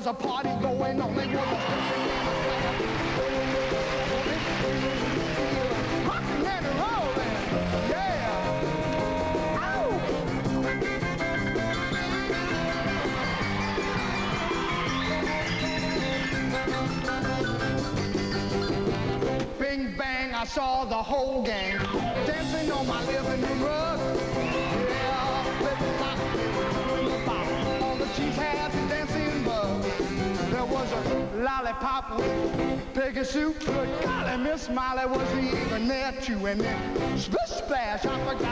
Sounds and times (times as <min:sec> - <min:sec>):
Music: 0:00.0 - 0:38.5.